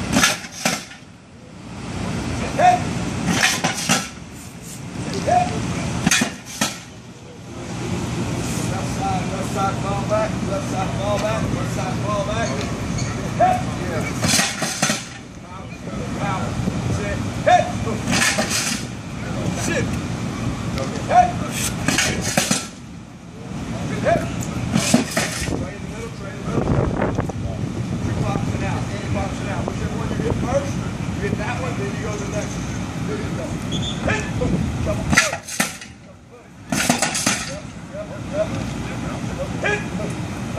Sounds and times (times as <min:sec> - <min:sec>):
Speech: 0:08.7 - 0:12.7, 0:15.4 - 0:18.2, 0:19.2 - 0:20.0, 0:23.4 - 0:24.8, 0:25.5 - 0:35.4, 0:37.4 - 0:40.2.